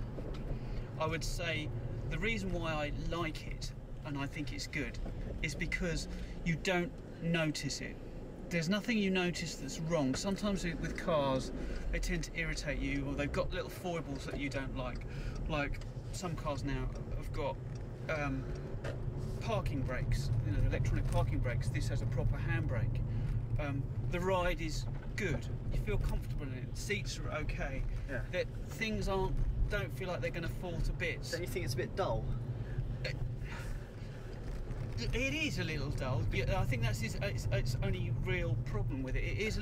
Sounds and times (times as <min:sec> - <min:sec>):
Speech: 0:01.0 - 0:18.4, 0:19.4 - 0:23.0, 0:23.6 - 0:32.4, 0:35.0 - 0:39.6.